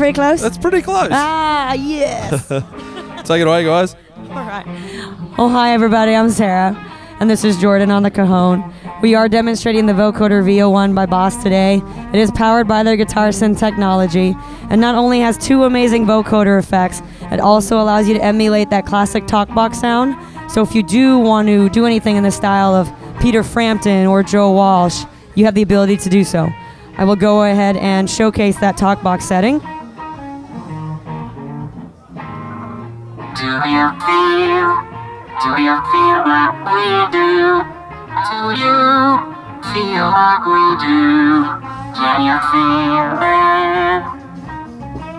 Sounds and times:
Music: 0.0s - 45.1s.

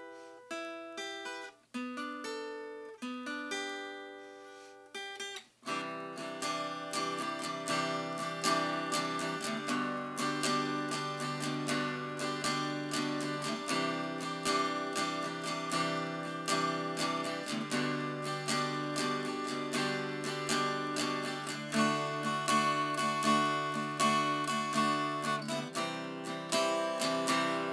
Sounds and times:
Acoustic guitar: 0.0s - 27.7s.

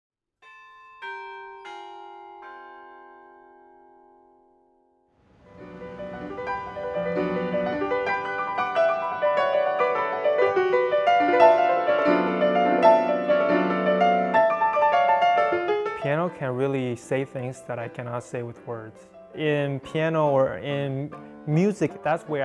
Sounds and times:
Piano: 0.4s - 22.4s
Classical music: 4.2s - 22.4s.

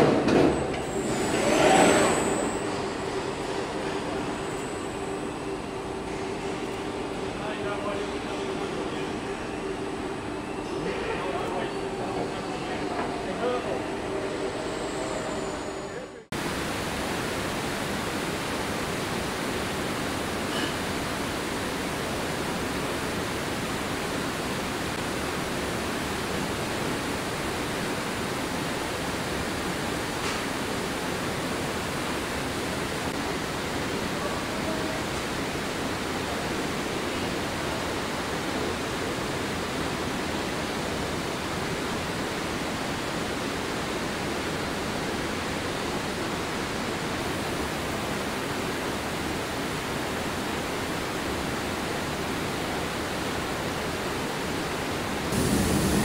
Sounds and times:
Speech: 7.4s - 9.2s, 10.8s - 13.9s.

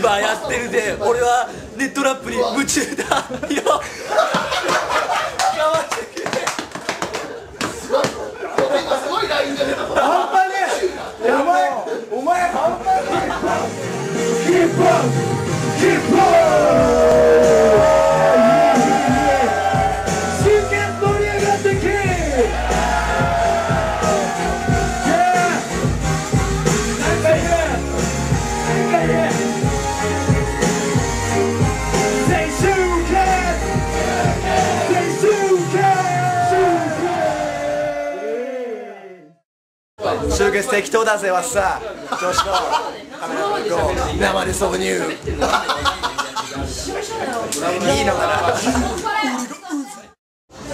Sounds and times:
Music: 0.0s - 7.8s, 12.2s - 38.7s, 43.7s - 49.0s.

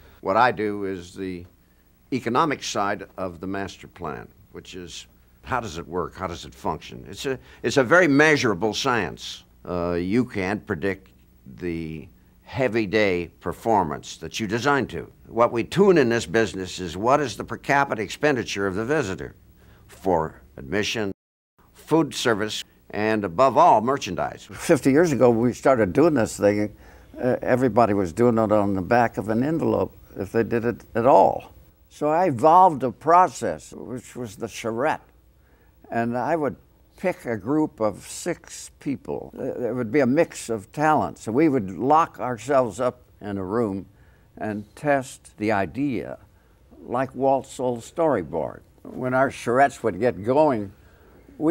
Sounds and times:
Speech: 0.2s - 1.5s, 2.1s - 21.2s, 21.8s - 35.2s, 35.8s - 50.8s.

